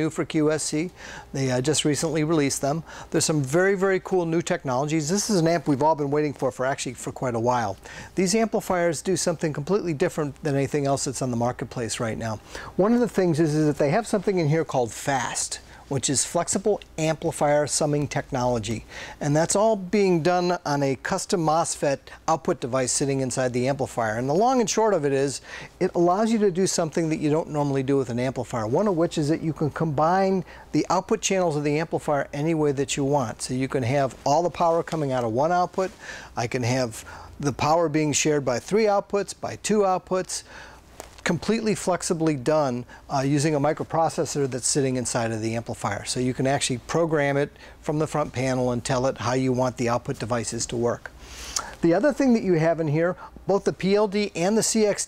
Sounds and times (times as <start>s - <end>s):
Speech: 0.0s - 40.5s, 41.2s - 55.0s.